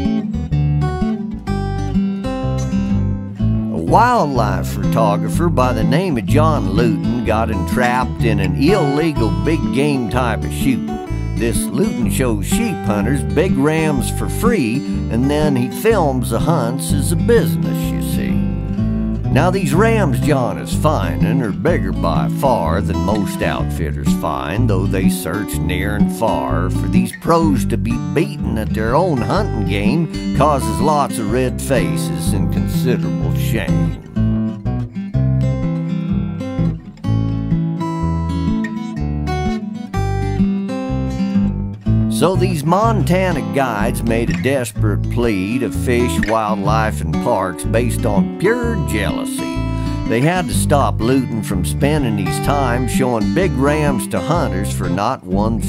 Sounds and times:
Music: 0.0 - 55.6
Speech: 3.7 - 18.4, 19.3 - 34.0, 42.1 - 55.6.

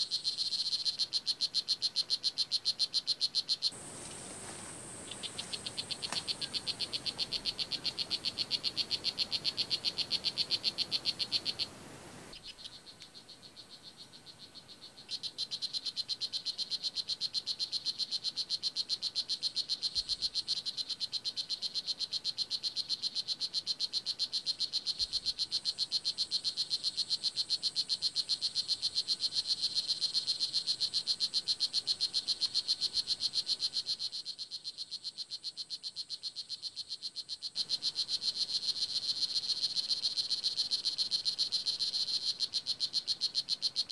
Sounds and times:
Frog: 0.0 - 43.9.

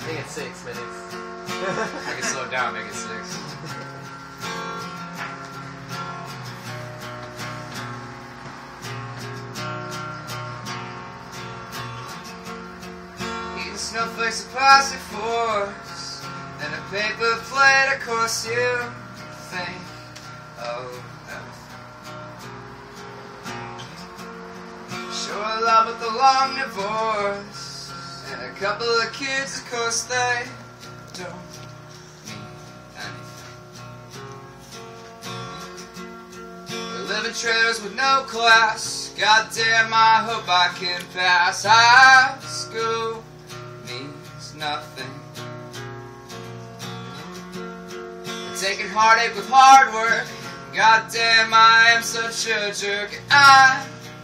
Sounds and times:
Music: 0.0 - 54.2.

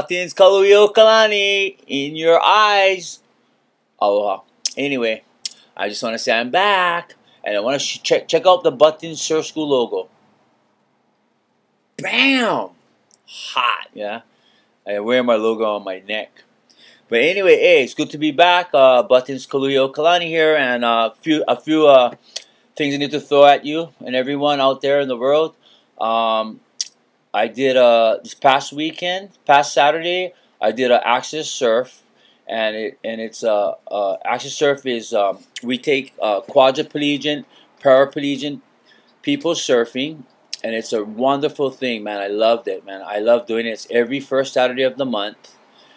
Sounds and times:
Speech: 0.0 - 3.2, 4.0 - 10.1, 12.0 - 12.7, 13.3 - 14.2, 14.9 - 16.4, 17.1 - 22.2, 22.8 - 26.6, 27.4 - 38.6, 39.2 - 45.6.

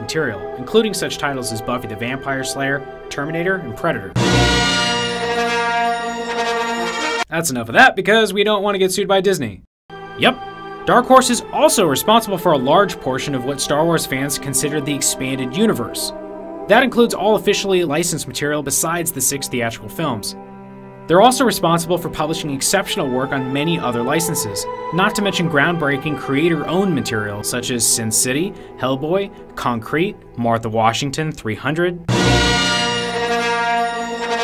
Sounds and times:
Speech: 0.0 - 4.2, 7.3 - 9.6, 10.2 - 20.4, 21.1 - 32.1
Music: 0.0 - 7.3, 9.9 - 34.4.

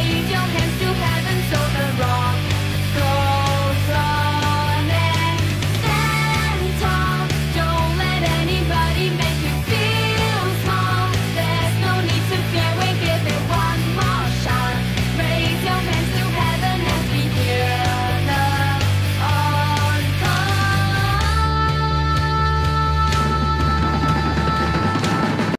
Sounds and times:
Progressive rock: 0.0 - 25.5
Singing: 0.0 - 25.5.

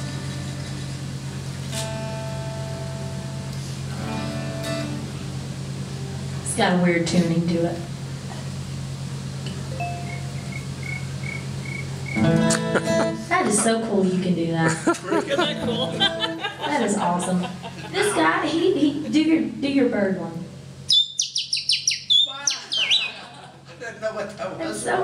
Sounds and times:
Music: 1.7 - 5.3, 12.2 - 13.3, 15.5 - 16.4.

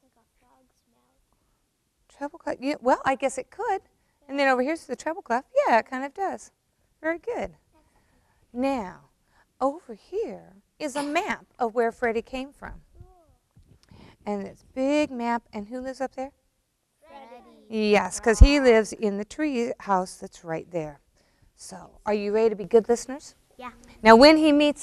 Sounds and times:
Speech: 9.6 - 12.8, 17.1 - 21.0.

